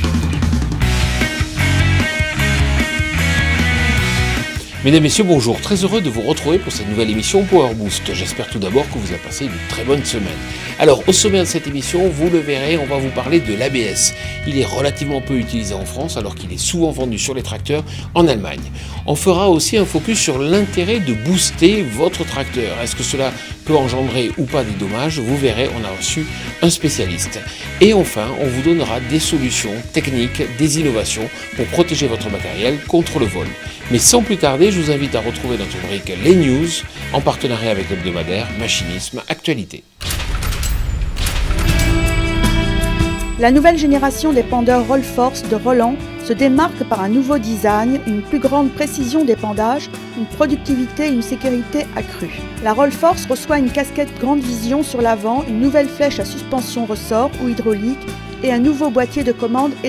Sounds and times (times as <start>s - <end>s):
Music: 0.0s - 59.8s
Speech: 4.7s - 39.9s, 43.4s - 59.8s.